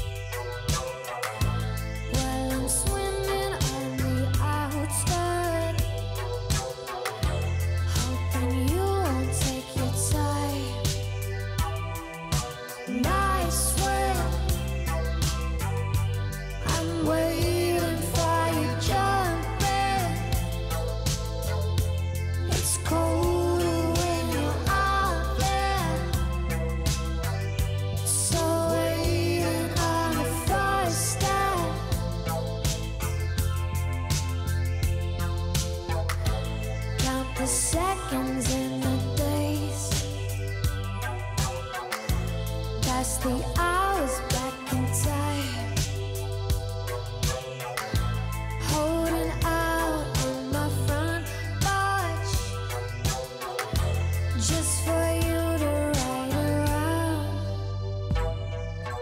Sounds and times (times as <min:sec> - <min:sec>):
Music: 0:00.0 - 0:59.0.